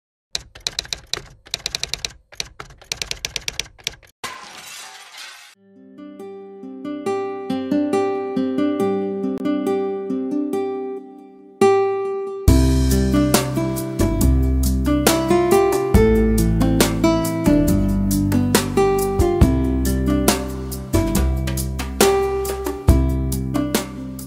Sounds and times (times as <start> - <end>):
Shatter: 4.2 - 5.6
Music: 5.6 - 24.2.